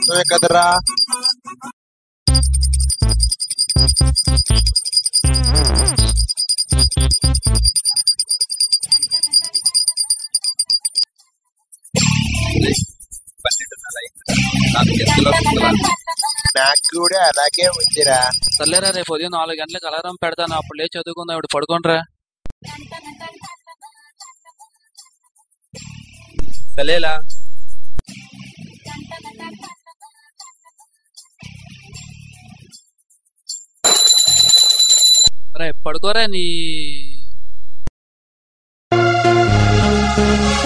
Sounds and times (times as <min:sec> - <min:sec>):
Music: 0:02.3 - 0:07.7, 0:12.0 - 0:12.8, 0:14.3 - 0:15.9, 0:22.7 - 0:23.4, 0:25.8 - 0:26.4, 0:28.1 - 0:29.8, 0:31.3 - 0:32.8, 0:39.0 - 0:40.6.